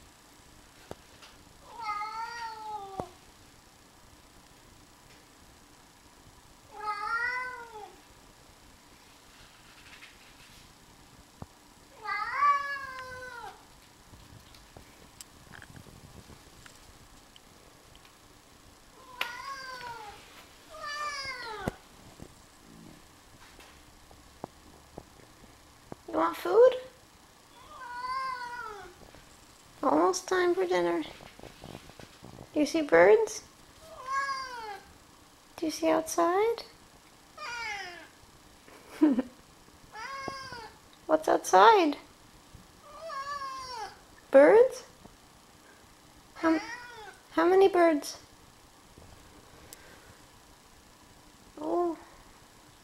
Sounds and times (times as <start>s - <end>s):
Meow: 1.6s - 3.2s, 6.7s - 8.0s, 12.0s - 13.6s, 19.0s - 21.7s, 27.5s - 29.0s, 33.8s - 34.9s, 37.4s - 38.1s, 39.9s - 40.8s, 42.8s - 44.0s, 46.5s - 47.2s
Caterwaul: 1.7s - 3.0s, 6.7s - 8.0s, 12.0s - 13.6s, 19.0s - 20.2s, 27.5s - 29.0s, 33.9s - 34.9s, 37.4s - 38.1s, 40.0s - 40.8s, 42.9s - 44.0s, 46.6s - 47.2s
Speech: 26.1s - 27.0s, 29.8s - 31.2s, 32.6s - 33.5s, 35.6s - 36.8s, 41.1s - 42.1s, 44.3s - 44.9s, 47.3s - 48.3s, 51.6s - 52.1s.